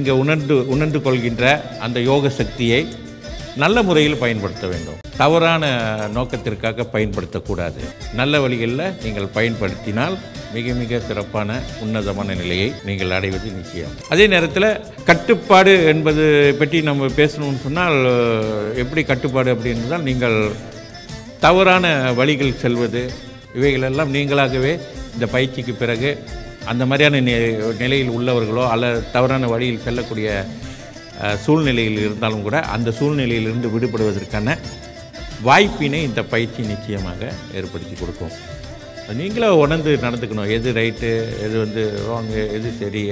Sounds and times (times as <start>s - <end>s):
Male speech, man speaking: 0.0s - 3.0s, 3.6s - 20.7s, 21.4s - 30.6s, 31.2s - 34.8s, 35.4s - 38.4s, 39.1s - 43.1s
Music: 0.0s - 43.1s
Narration, monologue: 0.0s - 43.1s.